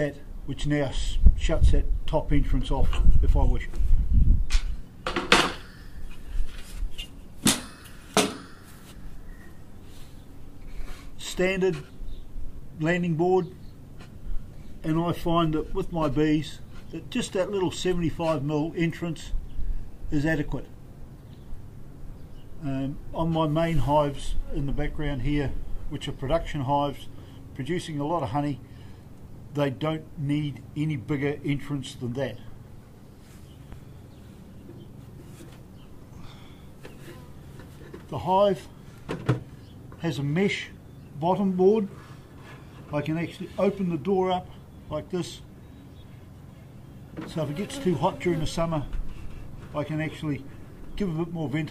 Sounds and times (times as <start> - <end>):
Speech: 0.0 - 3.8, 11.2 - 11.9, 12.8 - 13.6, 14.8 - 19.4, 20.1 - 20.7, 22.6 - 28.6, 29.5 - 32.5, 38.1 - 38.7, 40.0 - 42.0, 42.9 - 45.5, 47.2 - 49.0, 49.7 - 51.7.